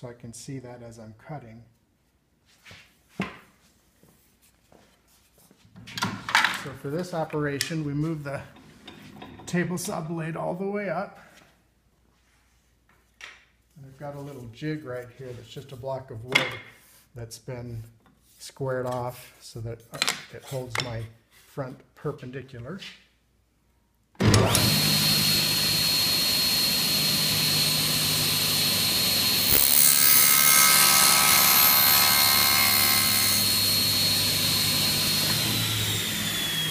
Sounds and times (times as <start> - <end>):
Speech: 0.0 - 1.8, 6.6 - 8.6, 9.5 - 11.3, 13.8 - 16.6, 17.2 - 23.0.